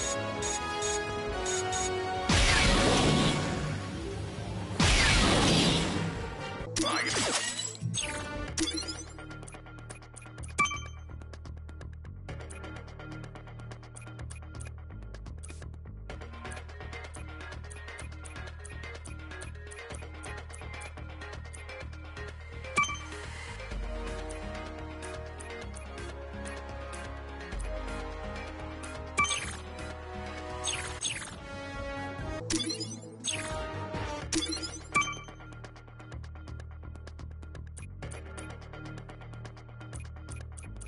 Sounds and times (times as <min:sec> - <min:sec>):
Music: 0:00.0 - 0:40.8.